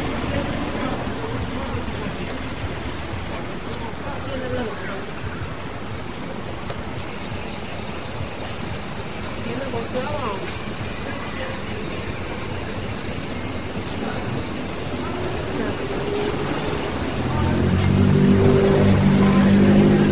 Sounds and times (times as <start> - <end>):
Speech: 0.0 - 6.5, 9.4 - 20.1.